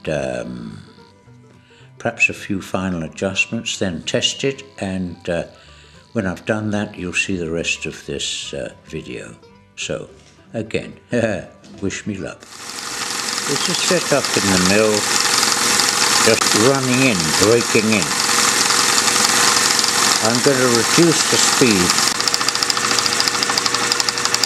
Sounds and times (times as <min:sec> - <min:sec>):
Speech: 0:00.0 - 0:00.9, 0:02.0 - 0:05.5, 0:06.2 - 0:12.4, 0:13.5 - 0:15.0, 0:16.2 - 0:18.2, 0:20.2 - 0:22.0
Engine: 0:12.5 - 0:24.4.